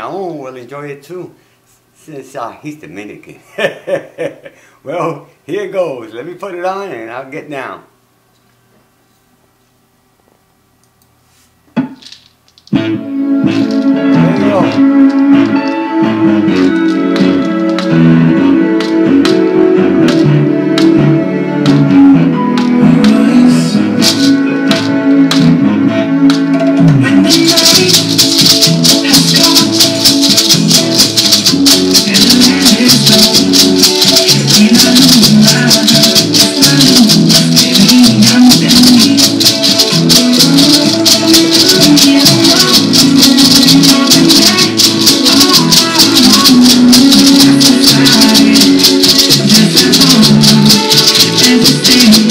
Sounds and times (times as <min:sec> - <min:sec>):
Maraca: 0:13.4 - 0:21.0, 0:22.6 - 0:25.6, 0:26.3 - 0:52.3.